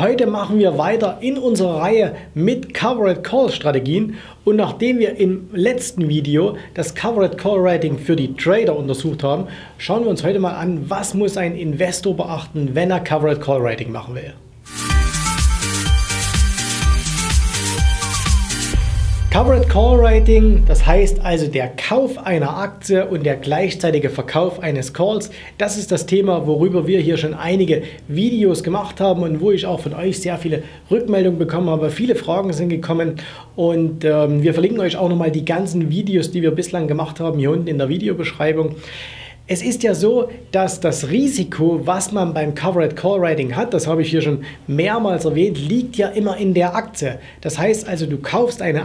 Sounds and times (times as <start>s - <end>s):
Speech: 0.0s - 14.4s, 19.3s - 38.8s, 39.5s - 48.8s
Music: 14.6s - 21.4s.